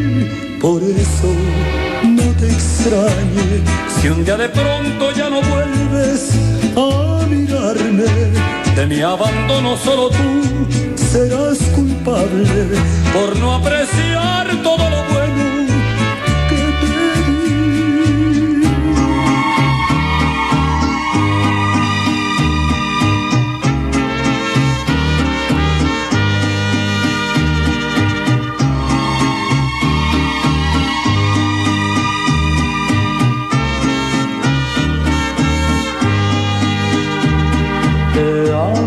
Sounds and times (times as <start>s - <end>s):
Music: 0.0s - 38.8s.